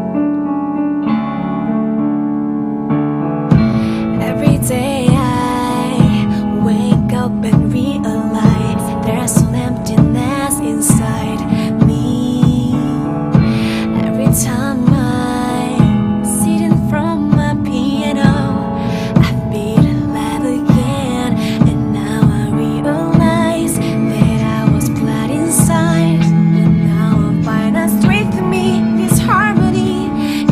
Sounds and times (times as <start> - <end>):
Jazz: 0.0 - 30.5.